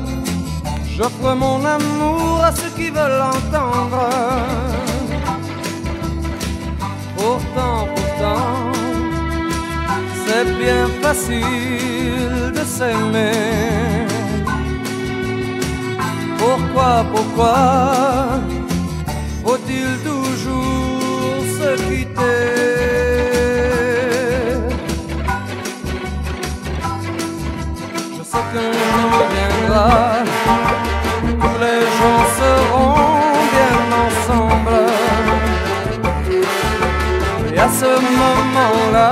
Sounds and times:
Music: 0.0s - 39.1s.

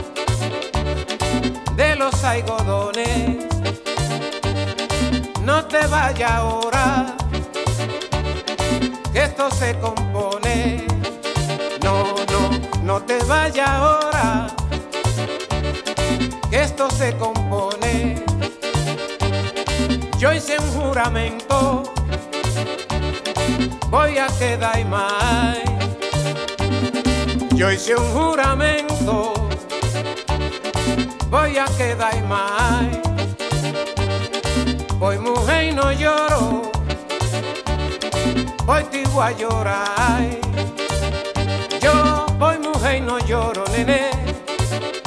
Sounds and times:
Salsa music: 0.0s - 45.0s.

